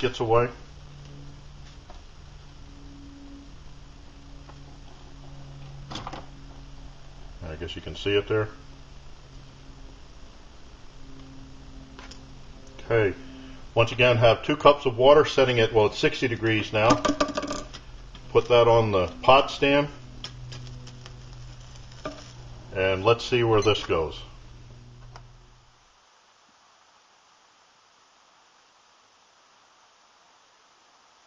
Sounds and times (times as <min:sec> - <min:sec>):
Speech: 0:00.0 - 0:00.6, 0:07.4 - 0:08.6, 0:12.8 - 0:13.2, 0:13.8 - 0:17.0, 0:18.3 - 0:20.0, 0:22.7 - 0:24.4.